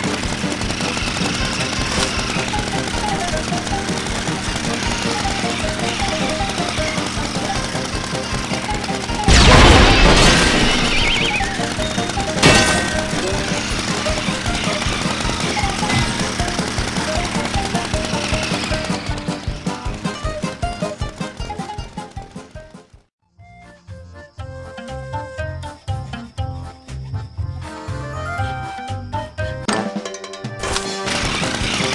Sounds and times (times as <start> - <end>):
Music: 0.0 - 31.9.